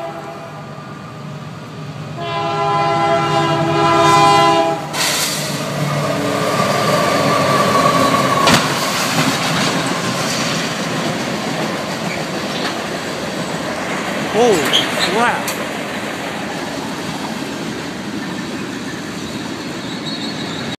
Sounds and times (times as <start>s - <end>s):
Speech: 14.3s - 15.6s.